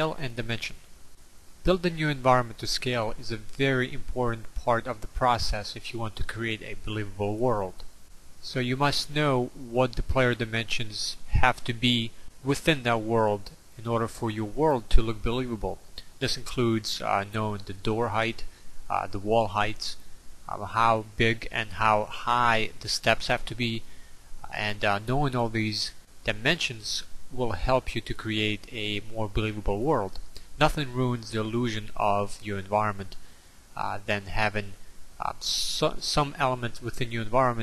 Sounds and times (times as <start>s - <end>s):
Speech: 0.0s - 0.8s, 1.6s - 23.9s, 24.5s - 33.2s, 33.8s - 37.6s.